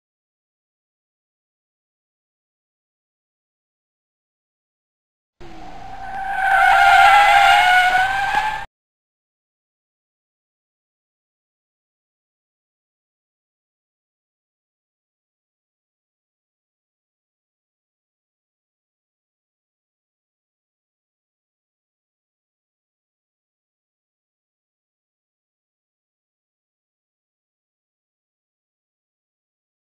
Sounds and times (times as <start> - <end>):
Car: 5.4 - 8.7
Silence: 5.4 - 8.7.